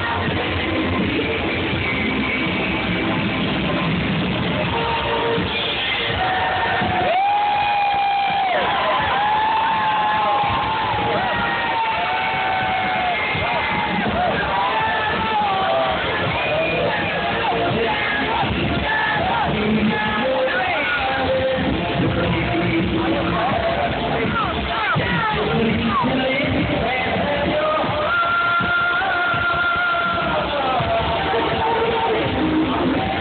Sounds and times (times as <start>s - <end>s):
Music: 0.0s - 33.2s
Cheering: 4.4s - 33.2s.